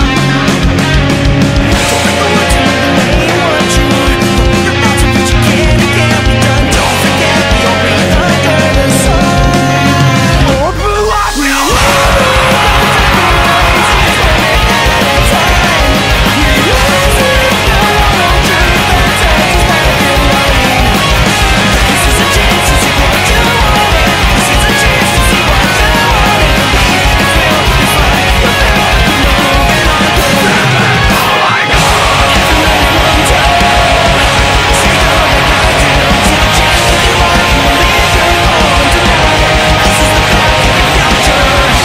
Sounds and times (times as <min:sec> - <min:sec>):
Guitar: 0:00.0 - 0:41.8.